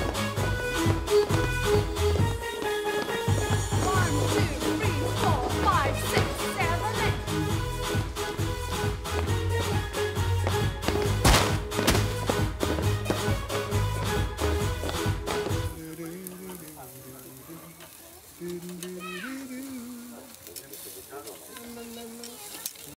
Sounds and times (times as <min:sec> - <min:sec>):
Music: 0:00.0 - 0:16.8
Speech: 0:18.9 - 0:22.9.